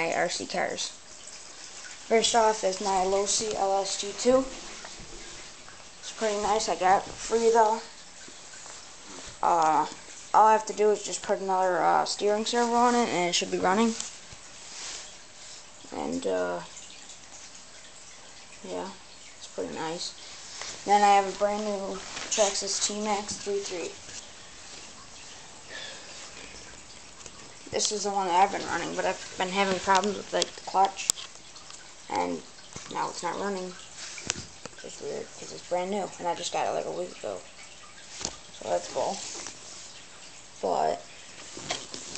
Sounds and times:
Speech: 0.0 - 1.0, 2.1 - 4.6, 6.1 - 7.9, 9.4 - 14.1, 15.9 - 16.7, 18.6 - 20.2, 20.8 - 24.0, 27.7 - 31.1, 32.1 - 33.8, 34.8 - 37.5, 38.6 - 39.2, 40.6 - 41.1.

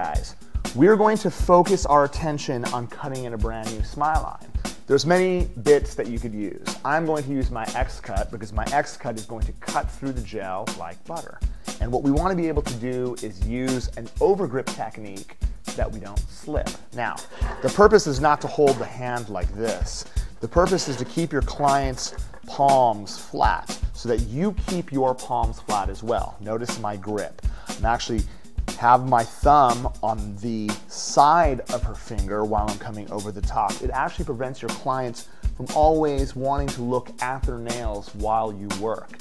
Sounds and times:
Music: 0.0 - 39.2
Speech: 0.0 - 39.2.

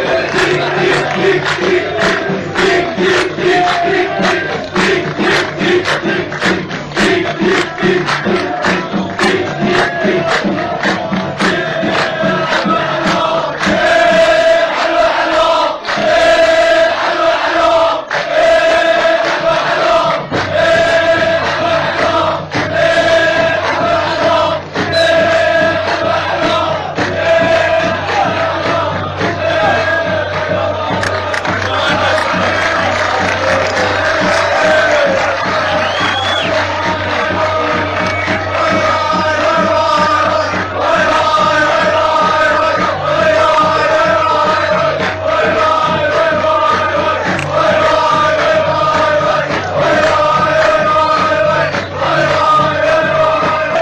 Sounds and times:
Music: 0.0 - 53.8.

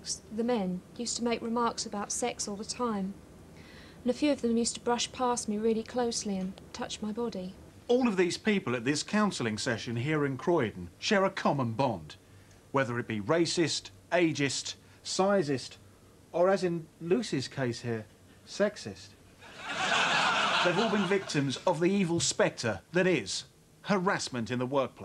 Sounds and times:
Speech: 0.0 - 3.2, 4.1 - 12.2, 12.8 - 15.8, 16.4 - 19.2, 20.6 - 25.0.

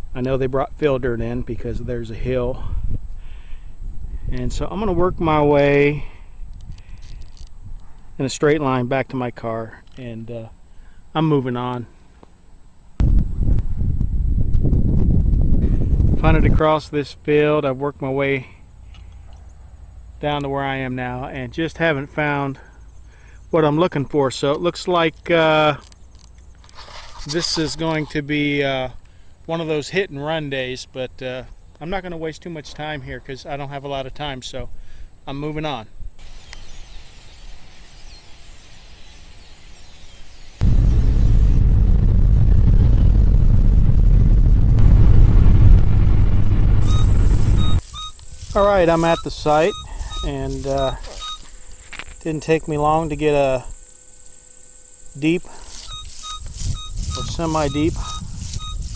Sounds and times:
Speech: 0.2 - 2.7, 4.3 - 6.1, 8.2 - 10.6, 11.2 - 11.9, 16.2 - 18.6, 20.2 - 22.7, 23.5 - 25.8, 27.3 - 34.7, 35.3 - 35.9, 48.5 - 51.2, 52.2 - 53.7, 55.2 - 55.5, 57.2 - 58.1.

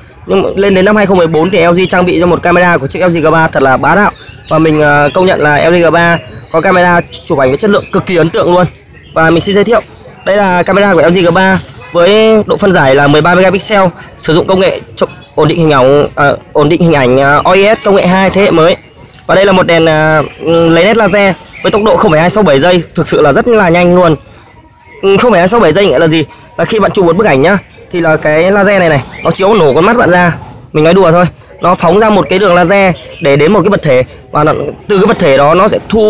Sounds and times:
Speech: 0.2 - 24.3, 25.0 - 36.0.

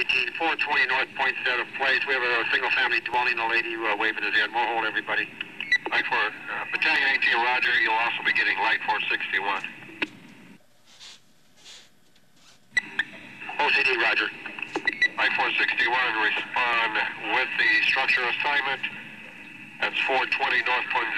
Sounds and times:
Speech: 0.0 - 5.3, 5.9 - 9.7, 13.6 - 14.4, 15.2 - 18.9, 19.8 - 21.1
Radio: 0.0 - 10.0, 12.8 - 21.1.

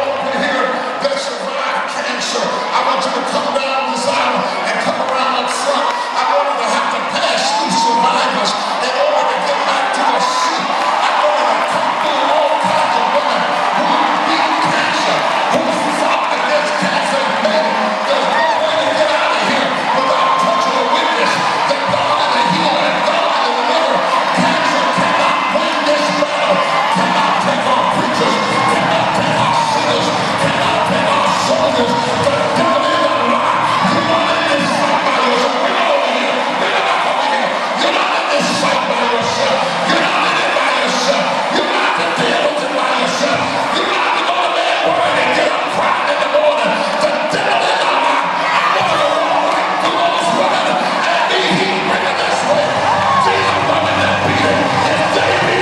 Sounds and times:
Cheering: 0.0 - 55.6
Crowd: 0.0 - 55.6.

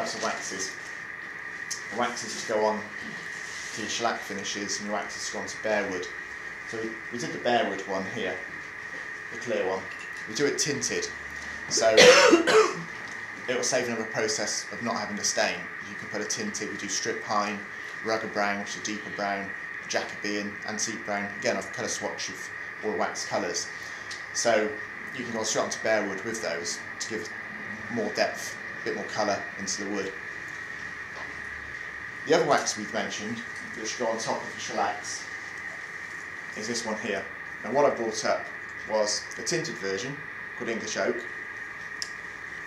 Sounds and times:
Speech: 0.0 - 0.8, 1.7 - 8.5, 9.3 - 12.8, 13.4 - 23.7, 24.4 - 27.3, 27.9 - 30.2, 32.3 - 35.3, 36.6 - 41.3.

